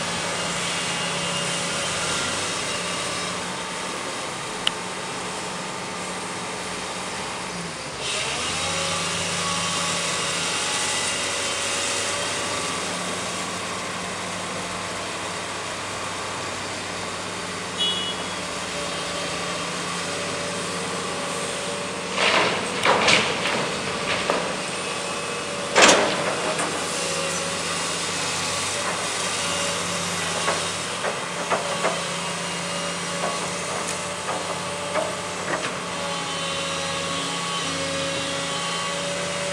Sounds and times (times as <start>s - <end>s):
Truck: 0.0s - 39.5s.